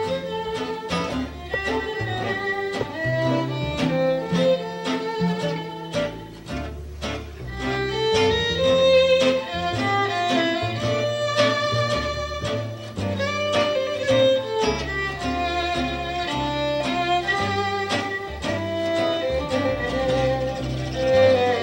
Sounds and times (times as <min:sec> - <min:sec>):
Guitar: 0:00.0 - 0:21.6
String section: 0:00.0 - 0:21.6
Violin, fiddle: 0:00.0 - 0:21.6.